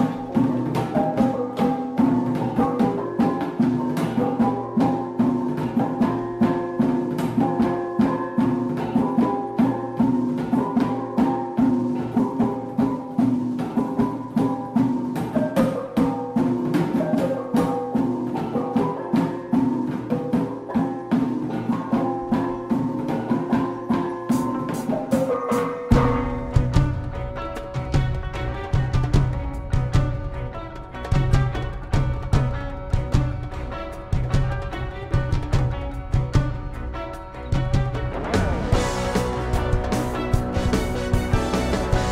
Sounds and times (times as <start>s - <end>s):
Music: 0.0s - 42.1s.